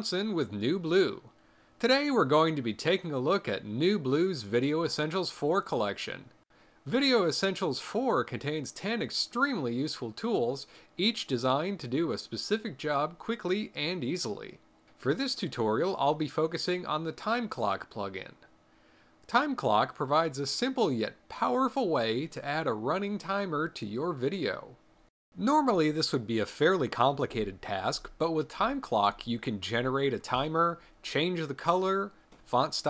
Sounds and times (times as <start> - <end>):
Speech: 0.0 - 18.5, 19.3 - 24.8, 25.4 - 32.8.